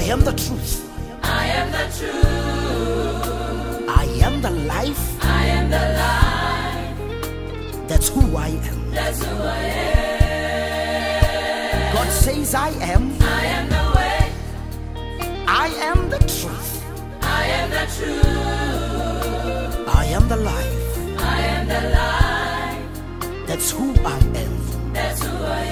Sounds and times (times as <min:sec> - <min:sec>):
Gospel music: 0:00.0 - 0:25.7.